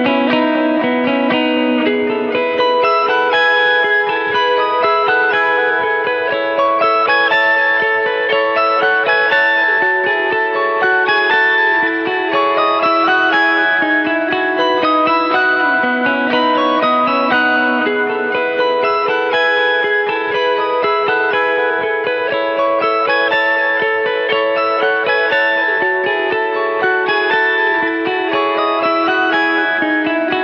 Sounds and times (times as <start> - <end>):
Electric guitar: 0.0 - 30.4.